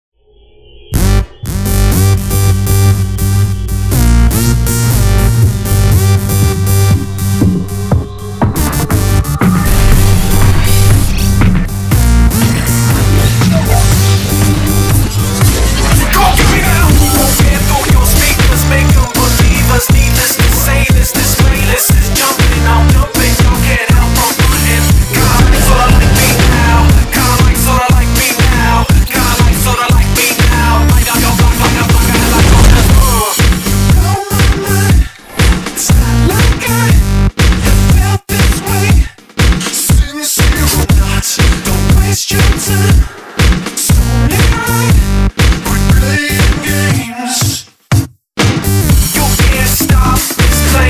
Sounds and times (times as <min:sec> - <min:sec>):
Throbbing: 0:01.0 - 0:34.8.